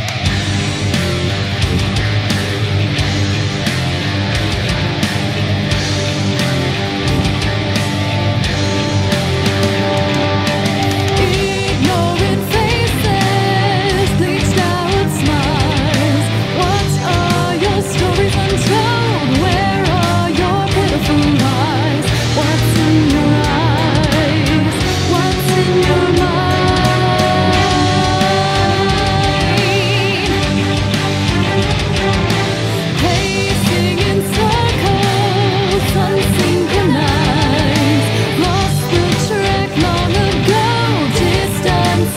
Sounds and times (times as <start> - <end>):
Music: 0.0 - 42.1.